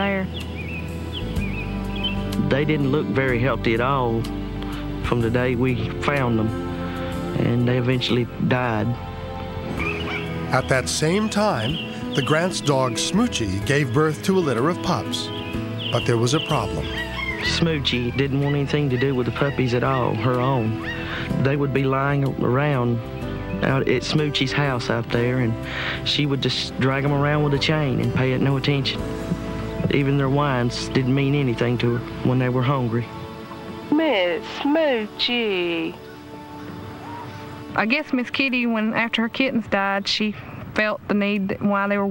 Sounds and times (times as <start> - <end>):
Music: 0.0 - 42.1
Domestic animals, pets: 16.9 - 17.5, 20.8 - 21.3
Speech: 17.4 - 20.7, 23.6 - 29.0.